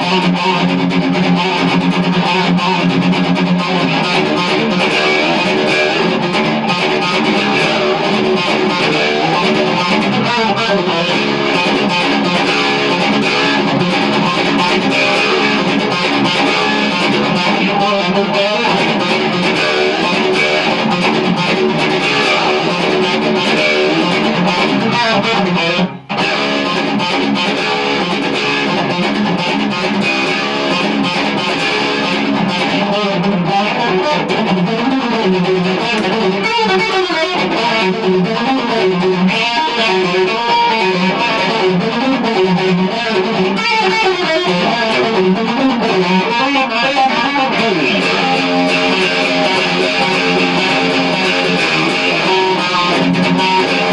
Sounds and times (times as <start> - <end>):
Electric guitar: 0.0 - 53.9
Strum: 0.0 - 53.9.